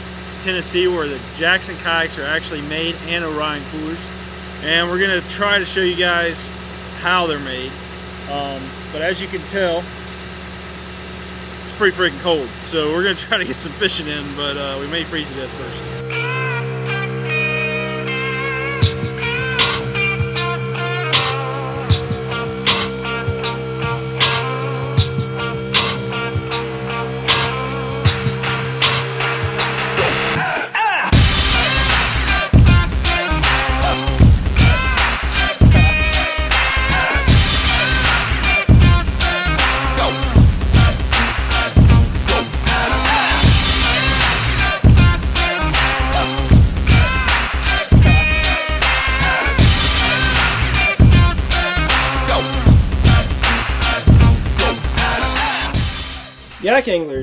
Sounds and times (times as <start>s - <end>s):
Music: 15.1s - 57.2s.